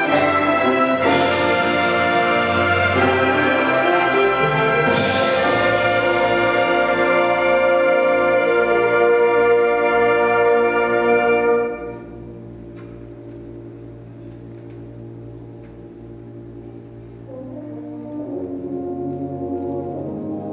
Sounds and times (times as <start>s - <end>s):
Inside, large room or hall: 0.0s - 20.5s
Orchestra: 0.0s - 20.5s.